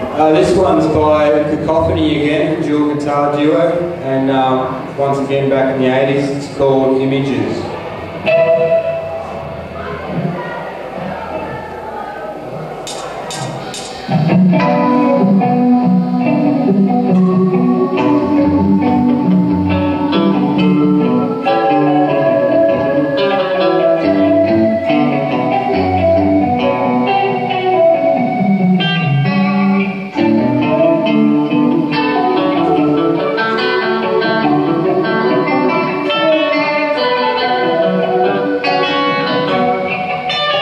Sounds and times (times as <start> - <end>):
Music: 0.0 - 40.6.